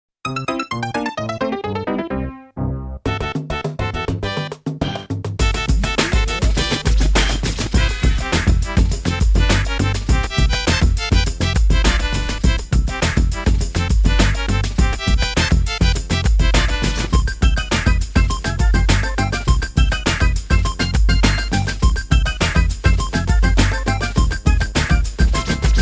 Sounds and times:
Soundtrack music: 0.3 - 25.8.

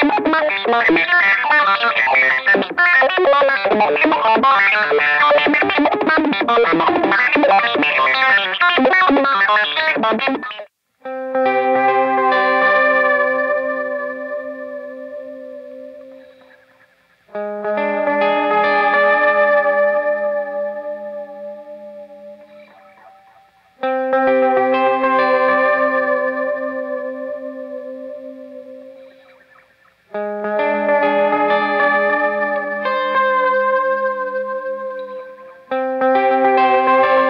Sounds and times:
Distortion: 0.0 - 37.2
Effects unit: 0.0 - 37.2
Electric guitar: 0.0 - 37.2.

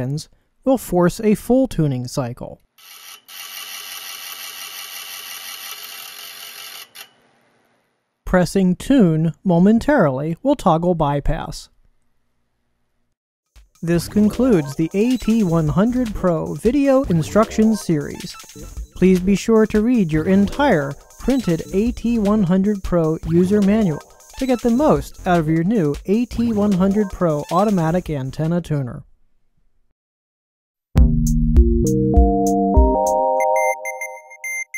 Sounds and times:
Synthesizer: 13.8 - 28.1, 31.4 - 34.7.

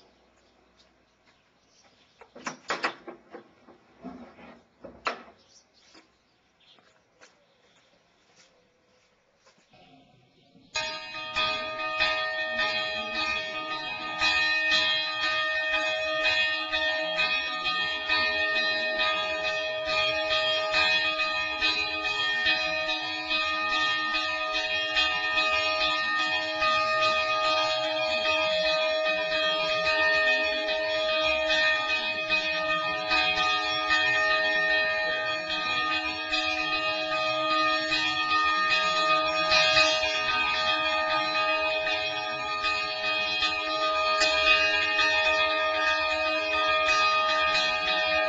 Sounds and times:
Bell: 10.8 - 48.2.

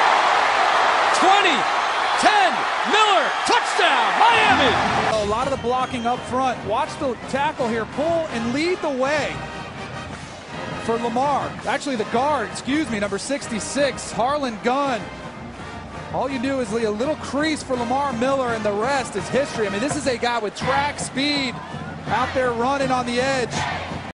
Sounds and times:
Speech: 2.2 - 9.4, 10.9 - 15.1, 16.2 - 23.6.

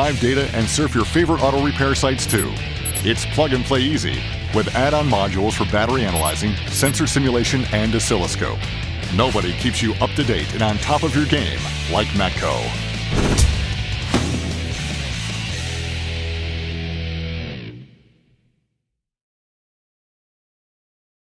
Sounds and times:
Speech: 0.0 - 12.8
Music: 0.0 - 18.8.

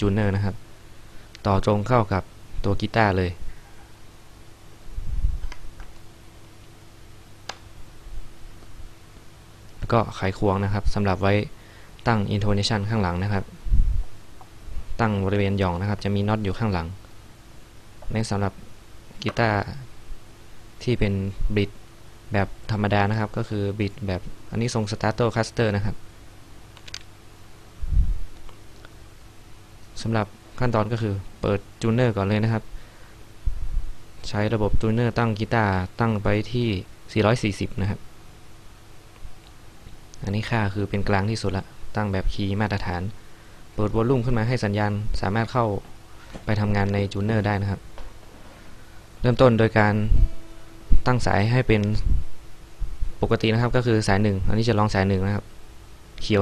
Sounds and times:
Speech: 0.0 - 0.6, 1.4 - 3.5, 9.8 - 13.6, 15.0 - 17.0, 18.0 - 18.6, 19.2 - 19.9, 20.8 - 26.0, 30.0 - 32.7, 34.2 - 38.0, 40.2 - 43.2, 43.8 - 45.9, 46.5 - 47.8, 49.2 - 50.3, 51.0 - 52.1, 53.2 - 55.5, 56.2 - 56.4.

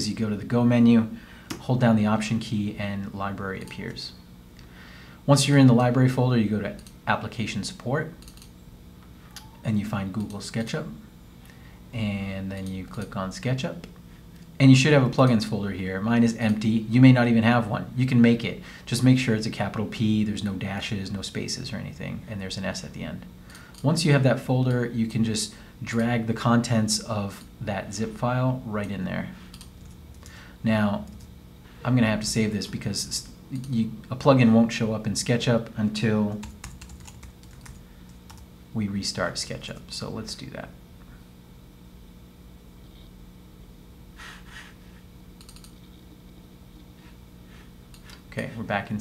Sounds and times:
Speech: 0.0 - 4.2, 5.3 - 8.2, 9.6 - 11.0, 11.9 - 13.9, 14.6 - 29.4, 30.6 - 31.2, 31.8 - 36.5, 38.7 - 40.8, 48.3 - 49.0
Typing: 8.2 - 8.5, 36.4 - 38.4, 45.4 - 45.9.

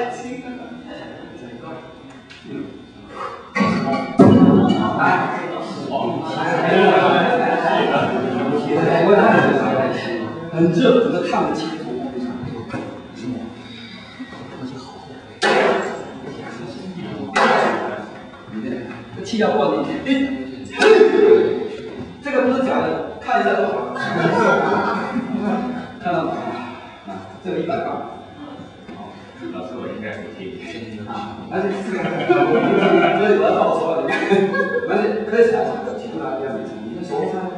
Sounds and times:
Inside, large room or hall: 0.0 - 37.5
Speech: 3.6 - 37.5.

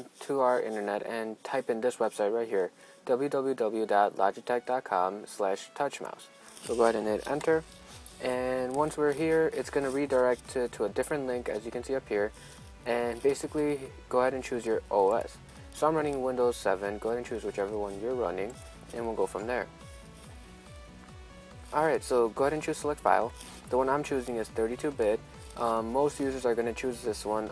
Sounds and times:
Speech: 0.0 - 7.6, 8.2 - 19.7, 21.7 - 27.5
Music: 0.0 - 27.5.

